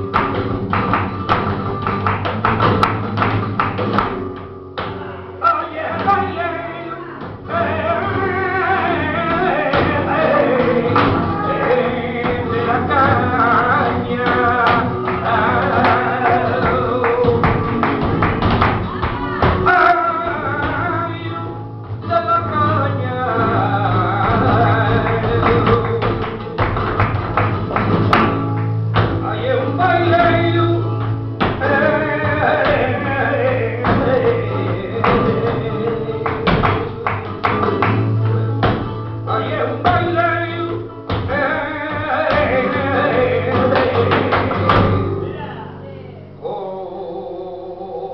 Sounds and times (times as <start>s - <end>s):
Flamenco: 0.0s - 48.1s
Singing: 5.4s - 26.9s, 29.1s - 37.6s, 39.2s - 48.1s.